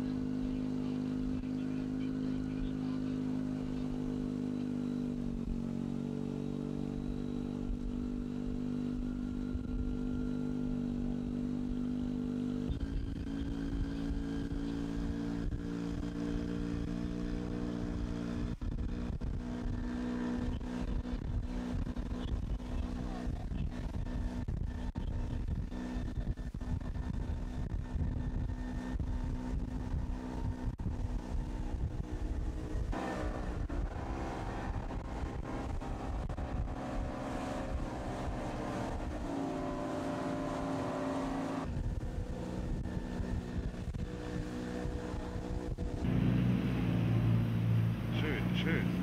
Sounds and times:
Water: 0:00.0 - 0:49.0.

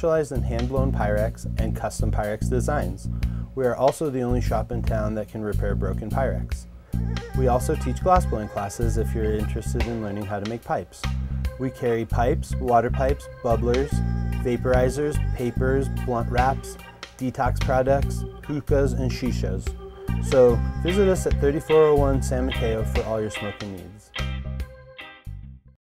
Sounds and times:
Speech: 0:00.0 - 0:06.7, 0:07.4 - 0:24.1
Music: 0:00.0 - 0:25.8.

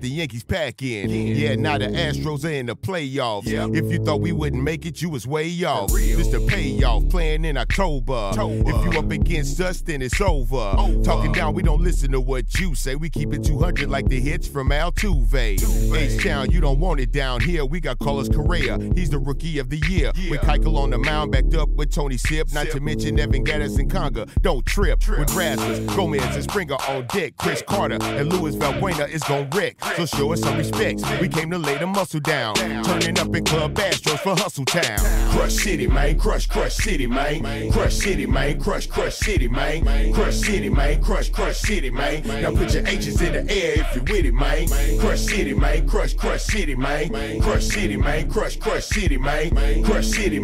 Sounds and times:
Hip hop music: 0:00.0 - 0:50.4.

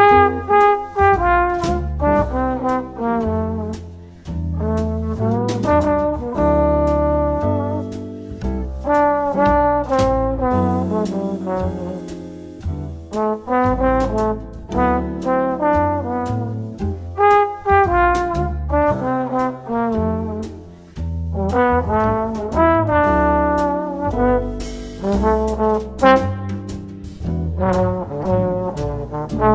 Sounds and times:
Trumpet: 0:00.0 - 0:29.5.

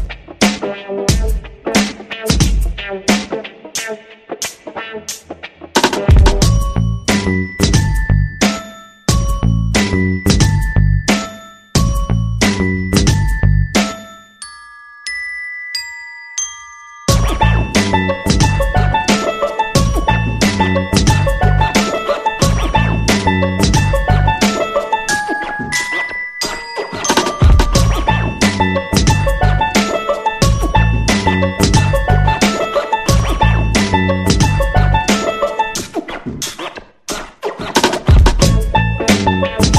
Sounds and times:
Glockenspiel: 0:06.4 - 0:35.8.

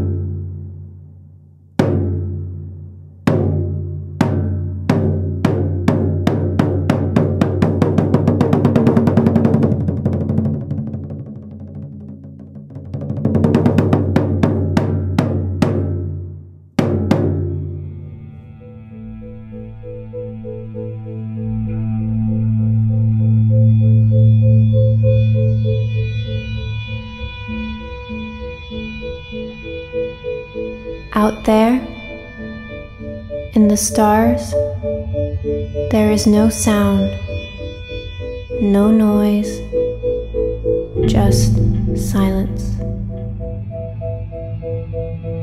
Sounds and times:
Music: 0:00.0 - 0:45.4
Speech: 0:31.2 - 0:32.0, 0:33.6 - 0:34.6, 0:35.9 - 0:37.2, 0:38.6 - 0:39.7, 0:41.0 - 0:42.9.

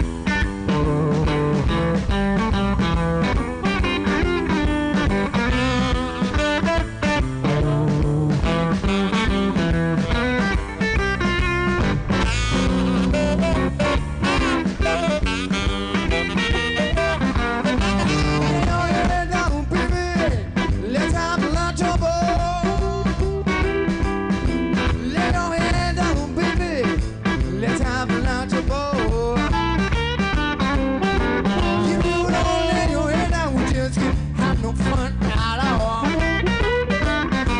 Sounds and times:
Guitar: 0:00.0 - 0:37.5.

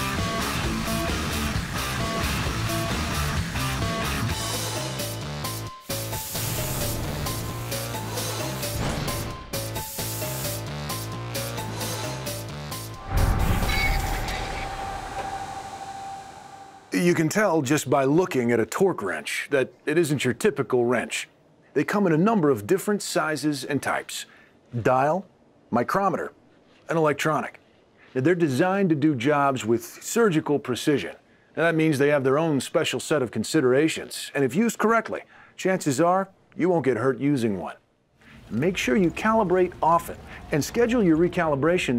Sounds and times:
Speech: 0:16.9 - 0:27.6, 0:28.2 - 0:37.8, 0:38.5 - 0:41.9.

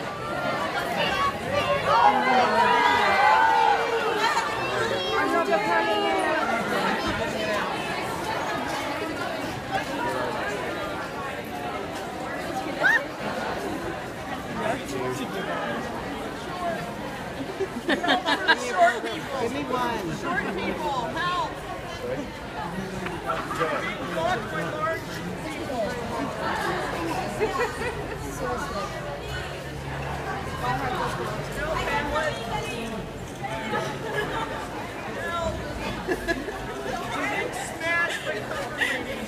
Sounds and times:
Speech: 0:00.0 - 0:39.2.

